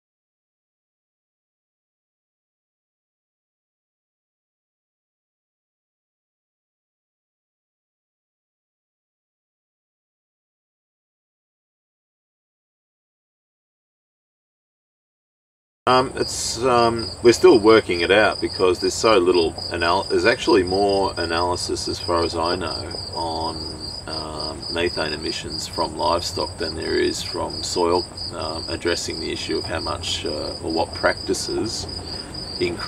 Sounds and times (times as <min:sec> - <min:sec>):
Speech: 0:15.9 - 0:31.9, 0:32.6 - 0:32.8.